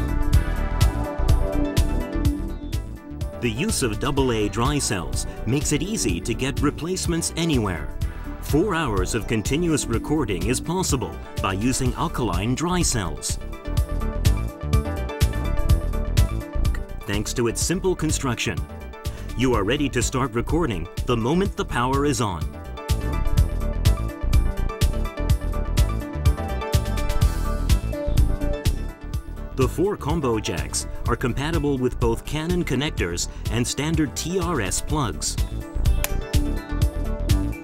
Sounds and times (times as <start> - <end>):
Music: 0.0 - 37.6
Speech: 3.4 - 7.9, 8.5 - 13.4, 17.1 - 18.7, 19.4 - 22.5, 29.6 - 35.4.